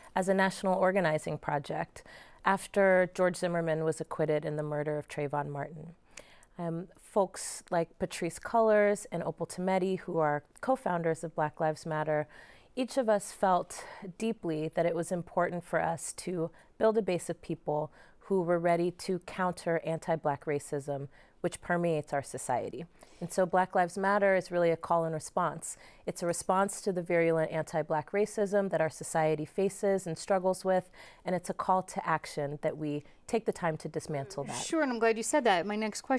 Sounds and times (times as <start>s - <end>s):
Speech: 32.3s - 36.1s.